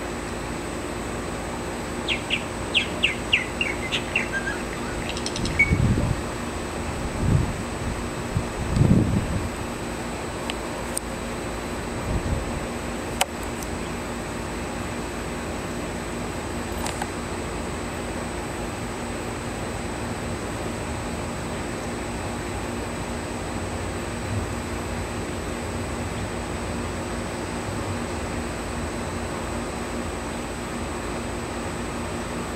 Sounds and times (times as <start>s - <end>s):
Outside, urban or manmade: 0.0s - 32.5s
Chirp, tweet: 2.1s - 5.8s.